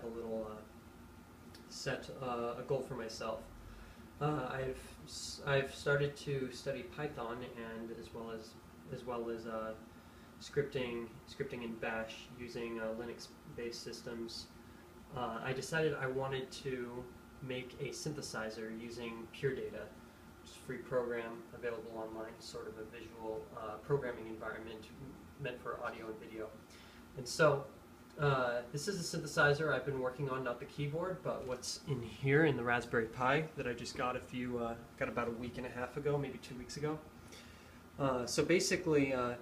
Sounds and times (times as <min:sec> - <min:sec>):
Speech: 0:00.0 - 0:00.7, 0:01.6 - 0:03.6, 0:04.2 - 0:26.6, 0:27.2 - 0:37.1, 0:38.0 - 0:39.4.